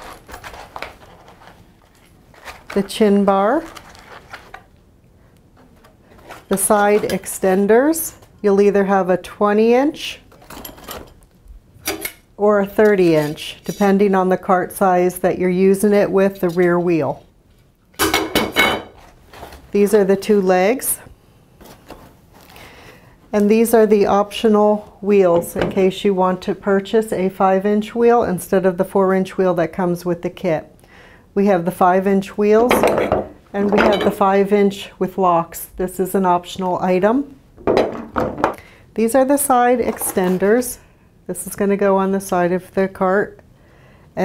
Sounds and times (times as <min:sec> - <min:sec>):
Speech: 0:02.8 - 0:03.8, 0:06.5 - 0:10.3, 0:12.4 - 0:17.3, 0:19.7 - 0:21.1, 0:23.3 - 0:30.7, 0:31.4 - 0:37.4, 0:39.0 - 0:43.4.